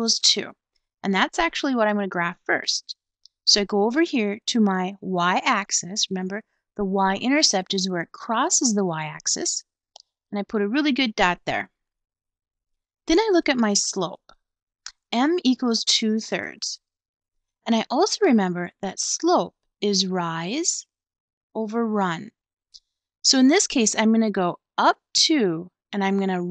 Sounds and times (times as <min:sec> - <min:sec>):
Narration, monologue: 0:00.0 - 0:26.5.